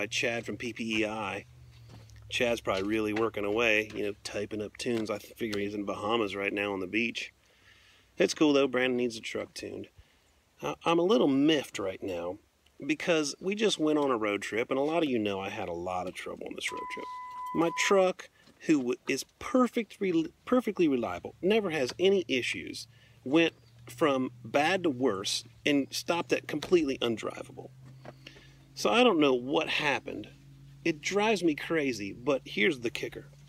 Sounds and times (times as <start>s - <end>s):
Speech: 0.0s - 1.4s, 2.3s - 7.3s, 8.2s - 9.9s, 10.6s - 27.7s, 28.8s - 30.3s, 30.9s - 33.3s.